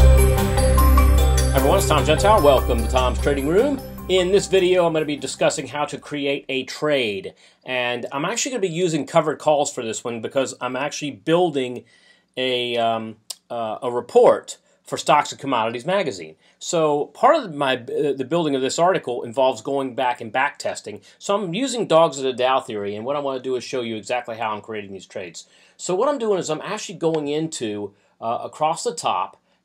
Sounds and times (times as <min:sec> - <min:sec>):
Speech: 0:01.6 - 0:29.4.